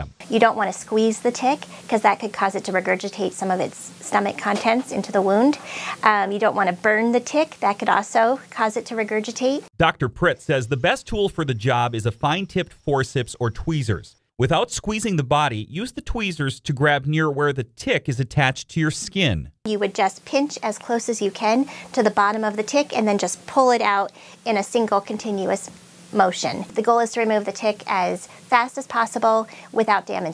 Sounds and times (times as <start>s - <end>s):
Speech: 0.0s - 30.3s.